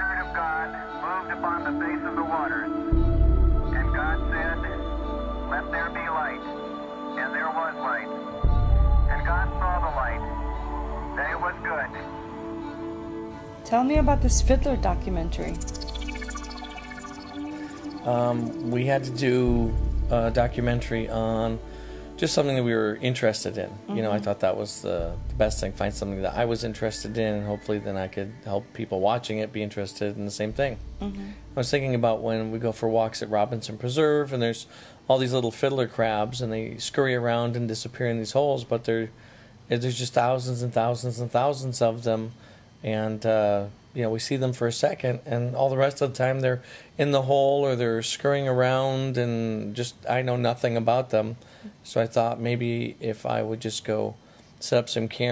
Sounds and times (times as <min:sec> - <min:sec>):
Speech: 0:00.0 - 0:02.8, 0:03.8 - 0:04.9, 0:05.5 - 0:06.5, 0:07.2 - 0:08.2, 0:09.1 - 0:10.4, 0:11.2 - 0:12.1, 0:13.7 - 0:15.7, 0:18.1 - 0:21.6, 0:22.2 - 0:39.1, 0:39.7 - 0:55.3
Music: 0:00.0 - 0:39.1.